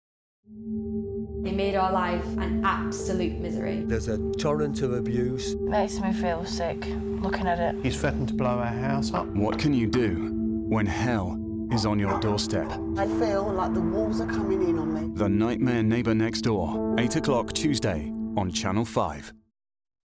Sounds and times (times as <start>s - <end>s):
Music: 0.5s - 19.5s
Speech: 1.5s - 6.0s, 7.2s - 19.4s.